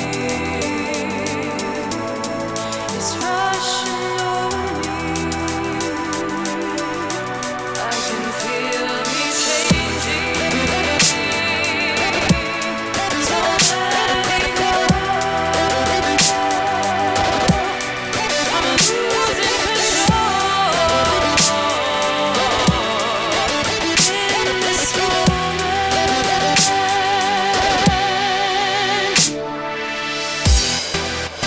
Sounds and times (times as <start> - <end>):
Dubstep: 0.0 - 31.4.